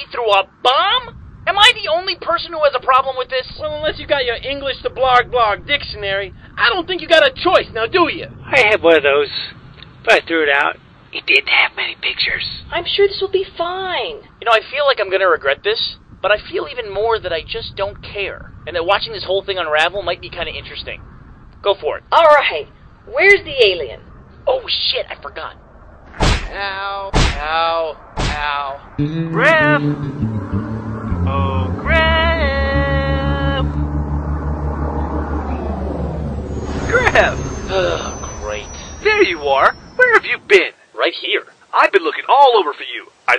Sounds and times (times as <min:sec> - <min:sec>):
Outside, rural or natural: 0:00.0 - 0:11.2, 0:15.5 - 0:43.3
Speech: 0:00.0 - 0:21.0, 0:21.6 - 0:25.6, 0:26.5 - 0:29.9, 0:36.9 - 0:43.3
Music: 0:29.0 - 0:39.1.